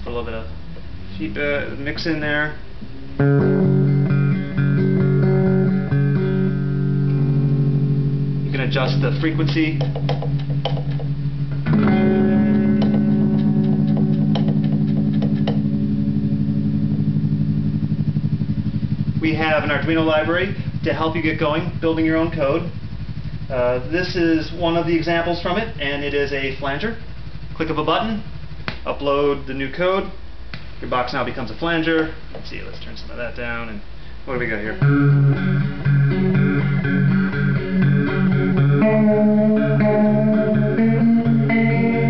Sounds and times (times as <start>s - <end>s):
Speech: 0.0s - 2.6s, 8.5s - 9.9s, 19.2s - 22.8s, 23.5s - 27.0s, 27.6s - 30.2s, 30.8s - 34.9s
Guitar: 0.0s - 22.8s, 34.3s - 42.0s
Inside, small room: 0.0s - 42.0s.